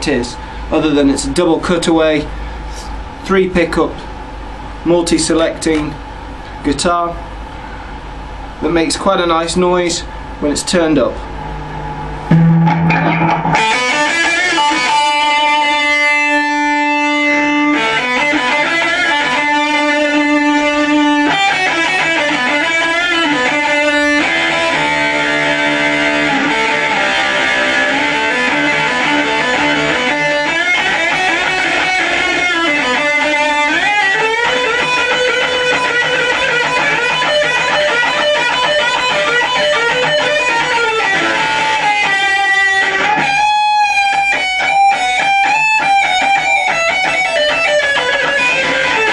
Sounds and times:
Strum: 11.5 - 49.1.

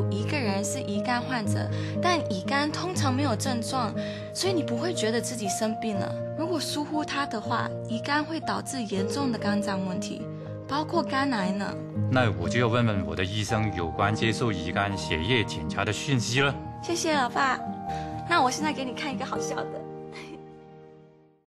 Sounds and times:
Conversation: 0.0 - 20.9
Music: 0.0 - 21.4.

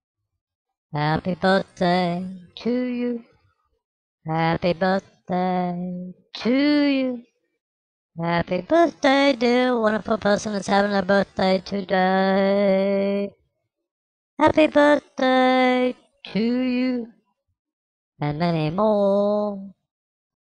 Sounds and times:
Speech: 1.0 - 3.2, 4.3 - 7.2, 8.2 - 13.3, 14.4 - 17.1, 18.2 - 19.8.

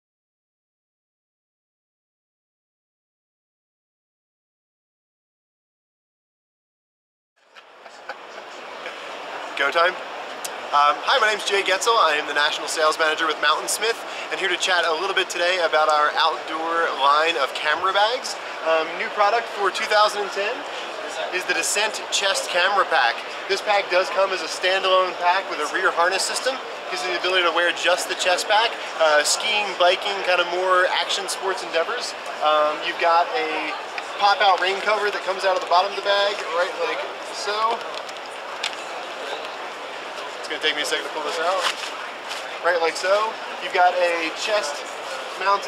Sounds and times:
Speech: 9.5 - 10.0, 10.7 - 37.9, 40.2 - 41.8, 42.6 - 45.6.

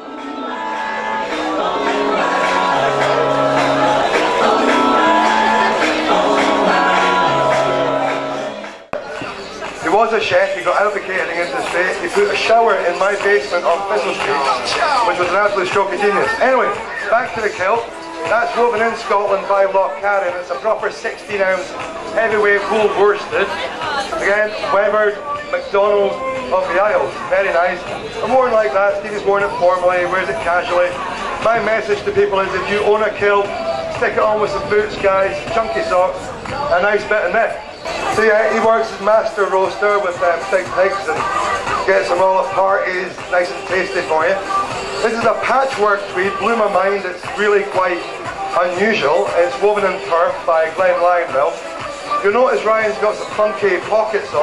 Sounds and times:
Music: 0.0 - 54.4
Speech: 9.0 - 54.4.

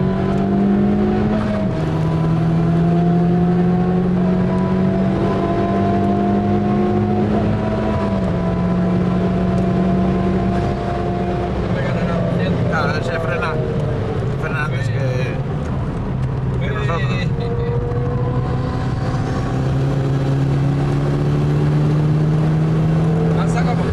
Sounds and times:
Car: 0.0 - 23.9
Speech: 11.8 - 13.6, 16.6 - 17.7, 23.4 - 23.9.

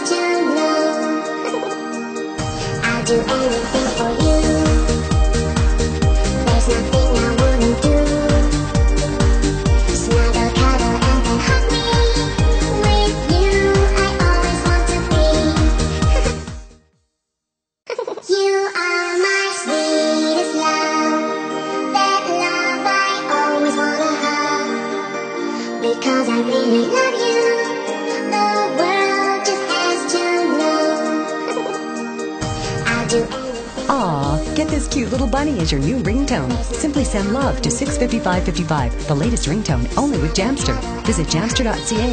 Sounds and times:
Ringtone: 0.6 - 5.5, 31.4 - 42.1
Song: 29.7 - 42.1.

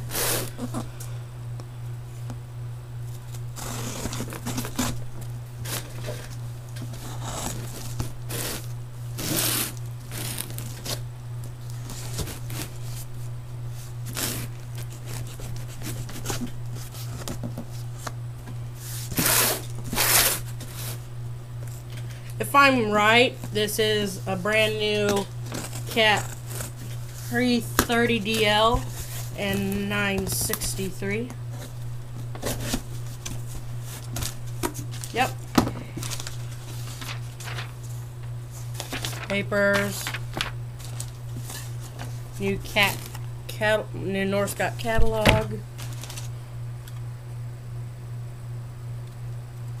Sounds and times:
Speech: 22.4 - 25.3, 27.3 - 28.8, 29.4 - 31.4, 35.2 - 35.4, 42.4 - 45.6.

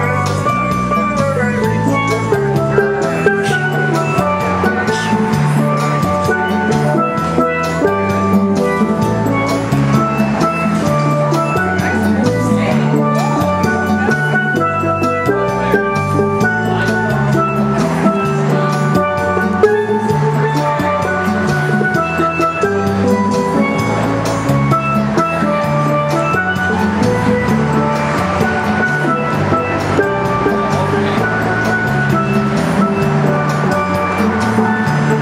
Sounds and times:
Steelpan: 0.0 - 35.2.

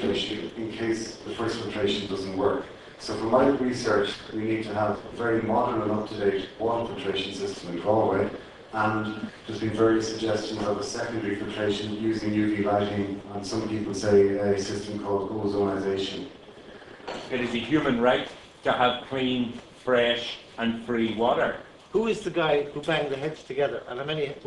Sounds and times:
Speech: 0.0 - 16.4, 17.3 - 24.4.

